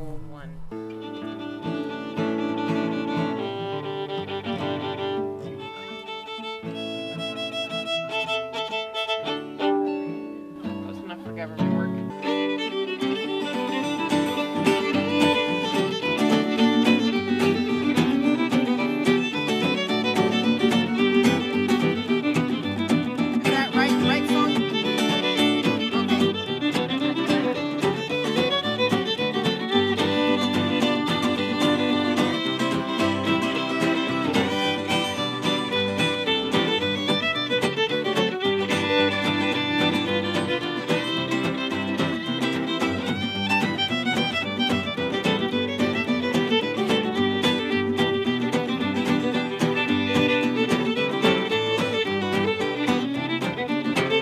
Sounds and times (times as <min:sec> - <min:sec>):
Speech: 0:00.0 - 0:00.7, 0:10.8 - 0:12.0, 0:23.5 - 0:24.6
Music: 0:00.0 - 0:54.2.